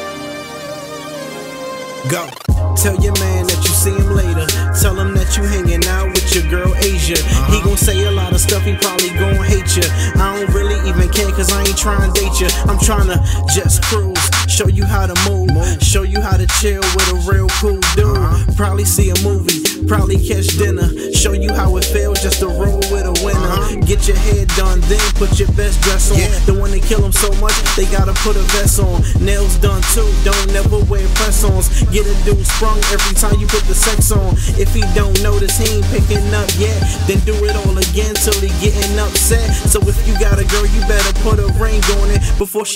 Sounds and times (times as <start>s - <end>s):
Music: 0.0s - 42.7s.